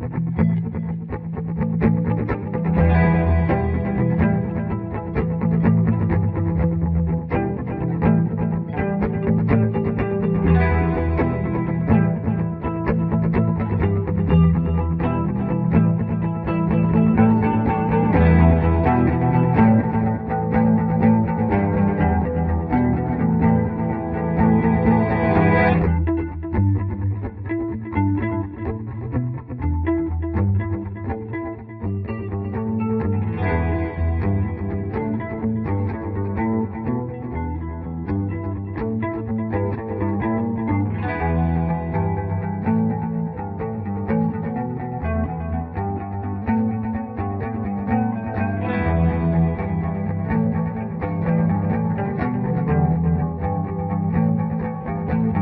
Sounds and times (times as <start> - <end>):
Music: 0.0 - 55.4.